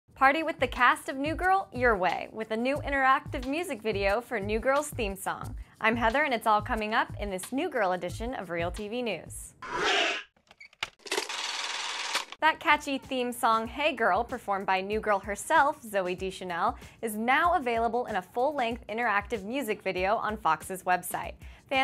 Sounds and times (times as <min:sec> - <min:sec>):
Music: 0:00.1 - 0:09.6, 0:12.4 - 0:21.8
Speech: 0:00.2 - 0:09.6, 0:12.4 - 0:21.8.